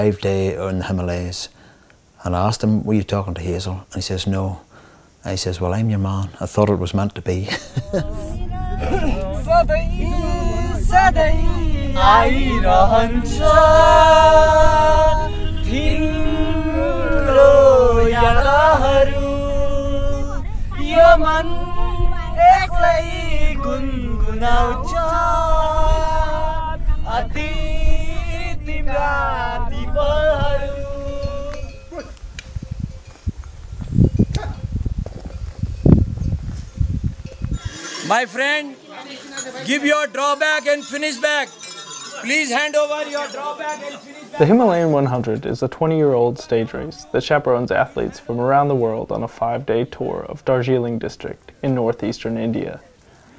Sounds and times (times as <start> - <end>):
Outside, rural or natural: 0.0 - 53.3.